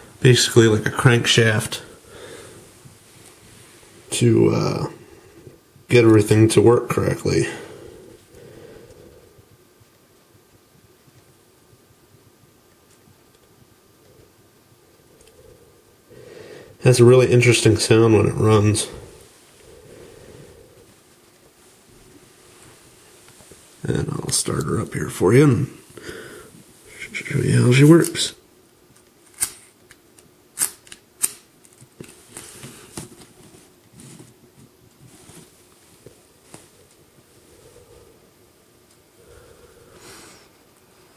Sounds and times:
Speech: 0.2s - 1.9s, 4.1s - 5.0s, 5.9s - 7.7s, 16.8s - 19.1s, 23.8s - 25.8s, 26.9s - 28.4s.

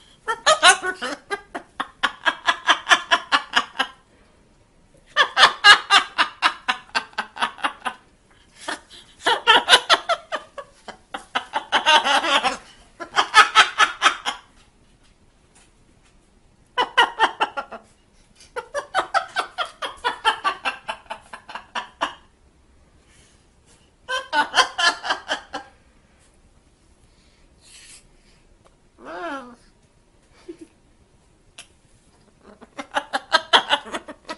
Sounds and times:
Laughter: 0.3s - 4.0s, 5.1s - 14.6s, 16.8s - 22.3s, 24.1s - 25.7s, 30.3s - 30.8s, 32.7s - 34.3s.

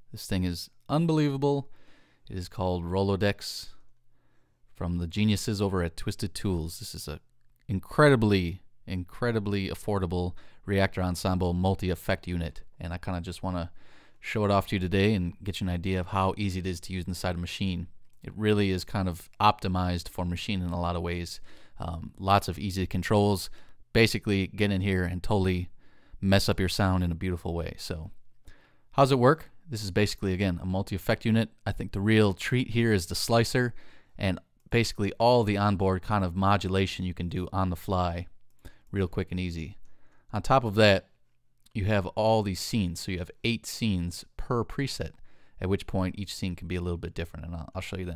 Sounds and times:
Speech: 0.0s - 1.7s, 2.3s - 3.9s, 4.8s - 28.2s, 28.9s - 48.1s.

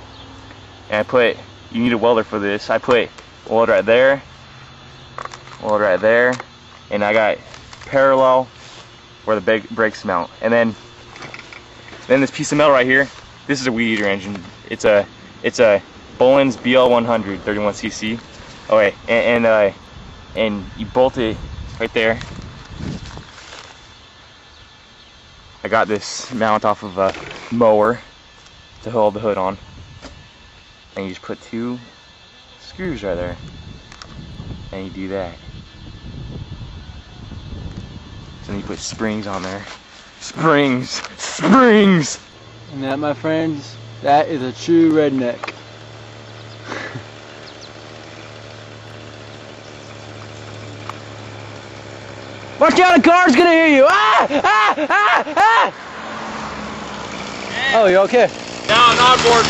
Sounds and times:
Speech: 0.9s - 4.2s, 5.6s - 8.5s, 9.3s - 10.8s, 12.1s - 19.8s, 20.4s - 22.2s, 25.6s - 28.0s, 28.8s - 29.6s, 31.0s - 31.9s, 32.6s - 33.4s, 34.7s - 35.4s, 38.4s - 45.4s, 52.6s - 54.0s, 57.5s - 59.4s.

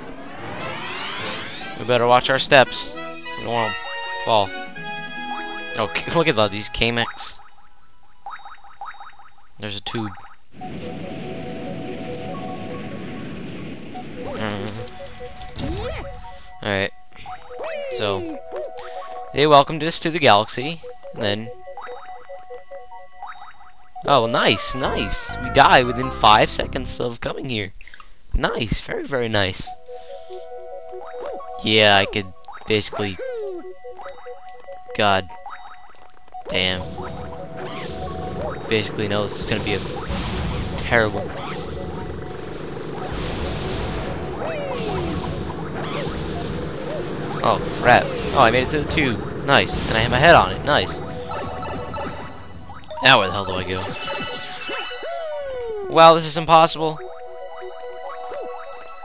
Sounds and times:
Music: 0.4s - 7.1s, 10.6s - 13.2s, 14.2s - 27.0s, 29.7s - 39.4s, 50.7s - 55.8s, 56.8s - 59.0s.

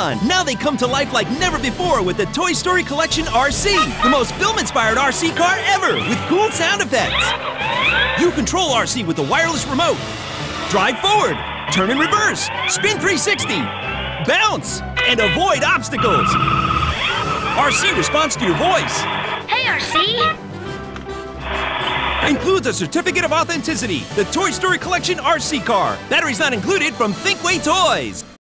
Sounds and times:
Speech: 0.0s - 7.3s, 8.2s - 10.0s, 10.7s - 13.7s, 14.3s - 16.4s, 17.6s - 19.0s, 22.2s - 28.3s
Music: 0.0s - 28.4s.

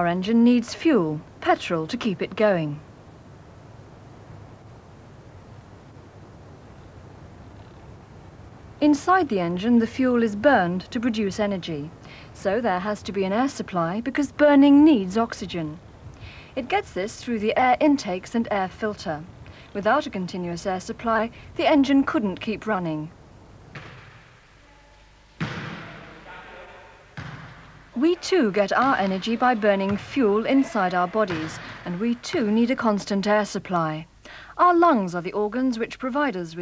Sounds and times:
Speech: 0.0s - 2.8s, 8.8s - 15.8s, 16.6s - 23.1s, 28.0s - 36.6s.

